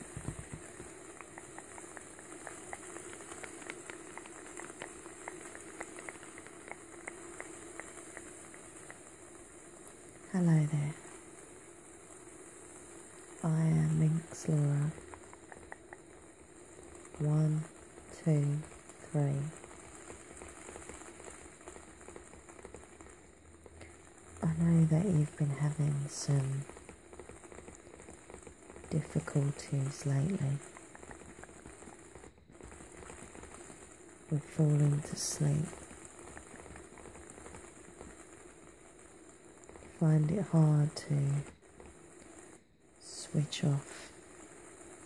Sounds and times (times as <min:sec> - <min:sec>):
Speech: 0:10.3 - 0:11.0, 0:13.4 - 0:15.0, 0:17.2 - 0:19.6, 0:24.4 - 0:26.7, 0:28.9 - 0:30.6, 0:34.3 - 0:35.8, 0:40.0 - 0:41.5, 0:43.0 - 0:44.1.